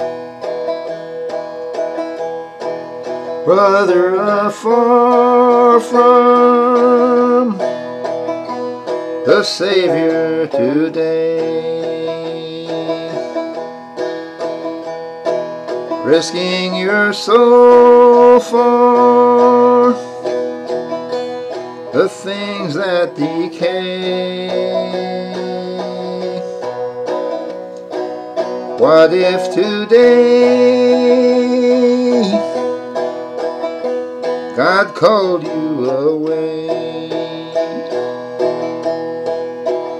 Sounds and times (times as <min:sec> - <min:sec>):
Banjo: 0:00.0 - 0:39.9.